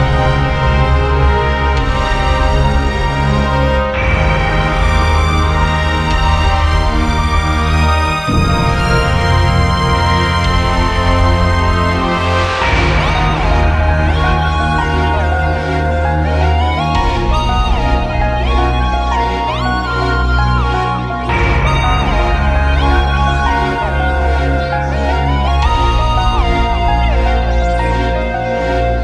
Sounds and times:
Theme music: 0.0s - 29.0s.

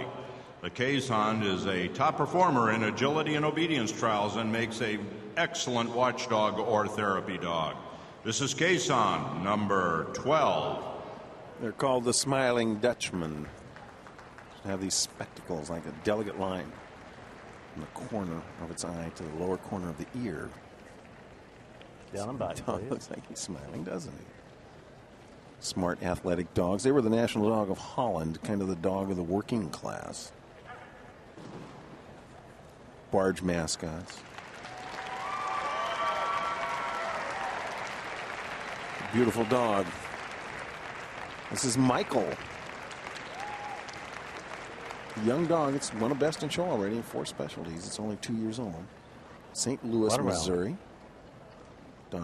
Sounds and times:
Speech: 0.0s - 11.0s, 11.6s - 13.6s, 14.6s - 16.8s, 17.8s - 20.6s, 22.1s - 24.3s, 25.6s - 30.4s, 33.1s - 34.2s, 39.0s - 40.0s, 41.5s - 42.4s, 45.2s - 48.9s, 49.5s - 50.8s.

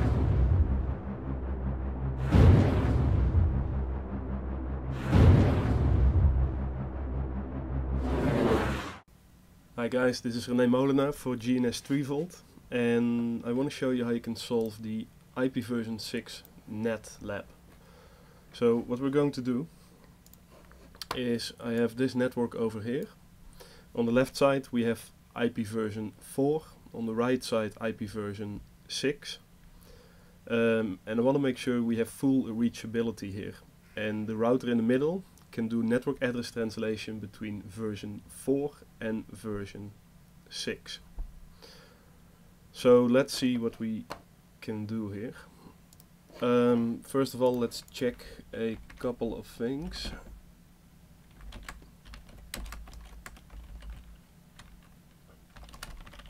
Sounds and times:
Speech: 9.8s - 17.6s, 18.5s - 19.7s, 21.0s - 23.2s, 23.9s - 29.5s, 30.5s - 41.1s, 42.7s - 45.5s, 46.4s - 50.4s.

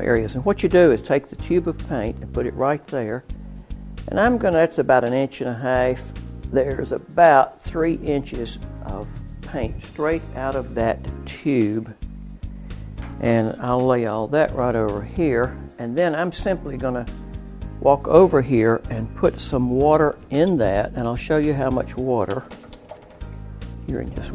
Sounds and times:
Speech: 0.0s - 3.2s, 4.1s - 12.0s, 13.2s - 17.1s, 17.8s - 22.5s, 23.9s - 24.3s
Music: 0.0s - 24.3s.

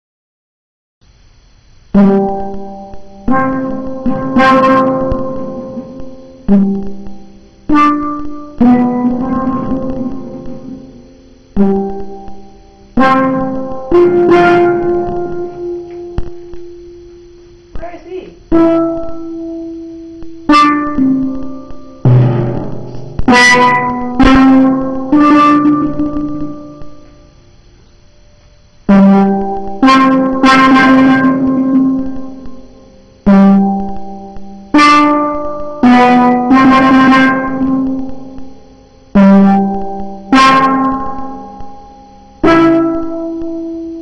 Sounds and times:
Drum: 2.0s - 16.8s, 20.3s - 27.2s, 28.9s - 32.6s
Steelpan: 2.0s - 27.4s, 28.9s - 43.7s.

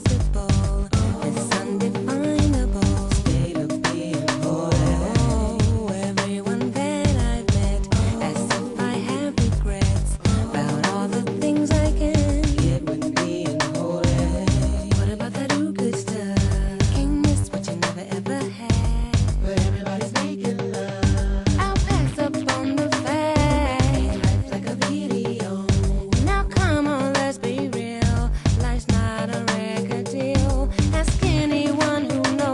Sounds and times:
Music: 0.0s - 32.5s.

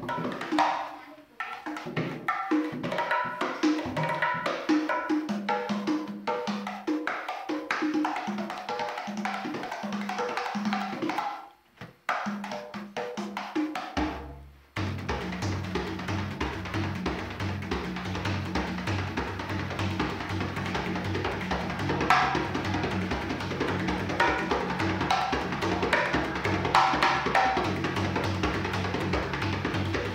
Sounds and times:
Tabla: 0.0s - 11.4s, 12.1s - 30.1s.

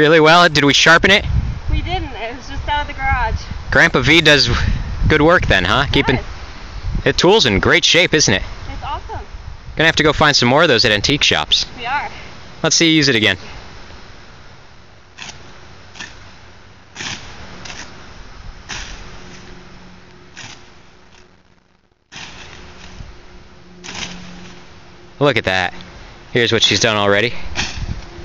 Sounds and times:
Speech: 1.8s - 6.3s, 26.4s - 27.4s.

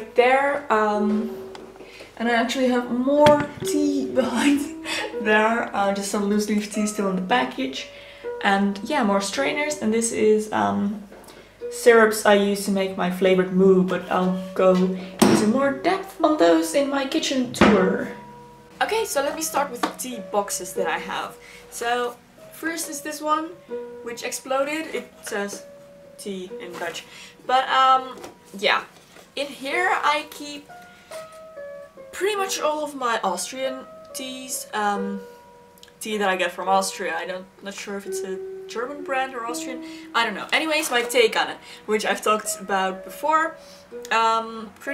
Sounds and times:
Speech: 0.0s - 1.3s, 2.2s - 11.1s, 11.7s - 18.2s, 18.8s - 25.6s, 26.2s - 30.7s, 32.2s - 35.2s, 35.9s - 43.5s, 44.1s - 44.9s
Inside, small room: 0.0s - 44.9s
Music: 0.0s - 44.9s.

